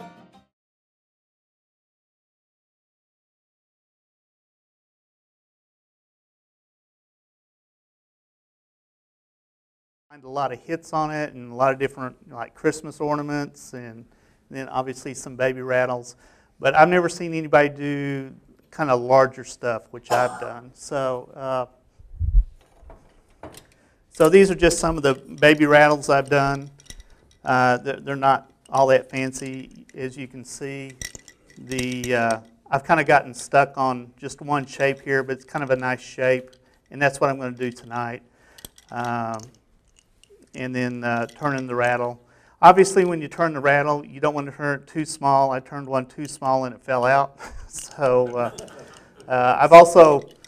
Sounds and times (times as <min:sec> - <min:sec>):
Speech: 0:10.1 - 0:21.8, 0:24.2 - 0:26.7, 0:27.5 - 0:31.0, 0:31.6 - 0:38.2, 0:38.9 - 0:39.5, 0:40.5 - 0:48.6, 0:49.3 - 0:50.3.